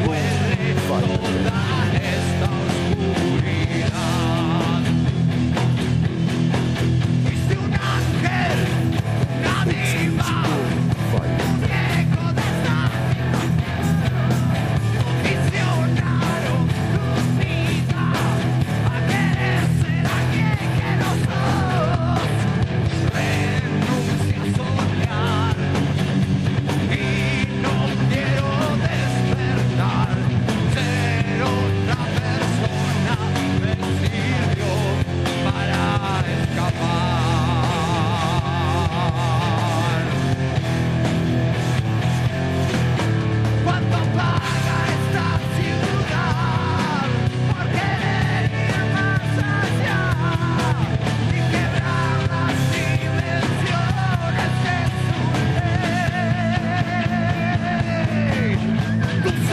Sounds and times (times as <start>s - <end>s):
Blues: 0.0s - 59.5s
Pop music: 7.3s - 26.0s, 43.6s - 59.5s.